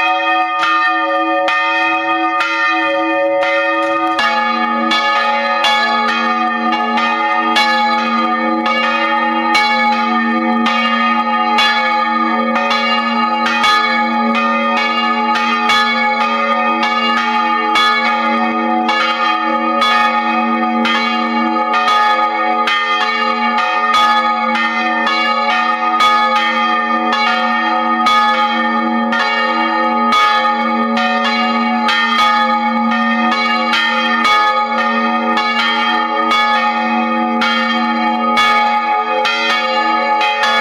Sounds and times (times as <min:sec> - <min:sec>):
Change ringing (campanology): 0:00.0 - 0:40.6.